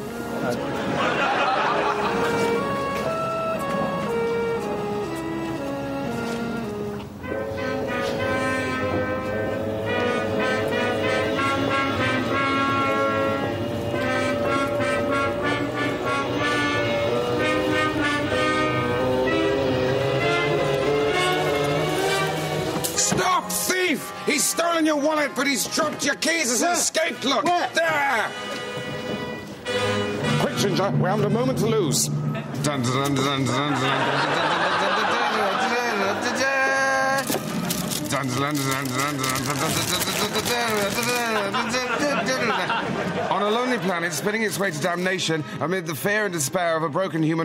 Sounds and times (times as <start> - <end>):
Music: 0.0 - 47.4
Speech: 23.0 - 28.3, 43.3 - 47.4.